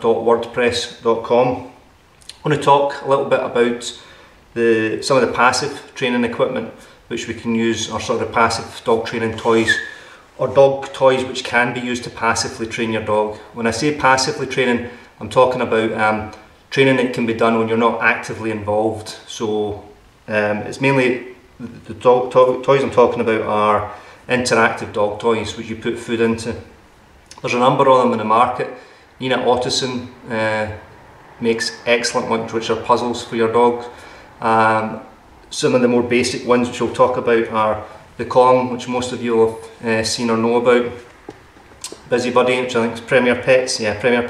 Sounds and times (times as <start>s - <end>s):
Speech: 0.0s - 4.0s, 4.6s - 26.7s, 27.3s - 41.1s, 41.9s - 44.3s.